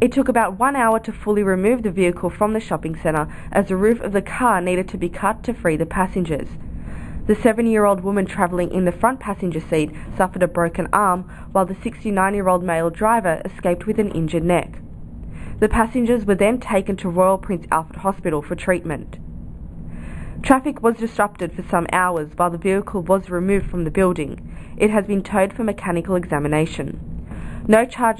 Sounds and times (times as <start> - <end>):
Speech: 0.0 - 6.6, 7.3 - 14.8, 15.6 - 19.2, 20.4 - 27.0, 27.7 - 28.2.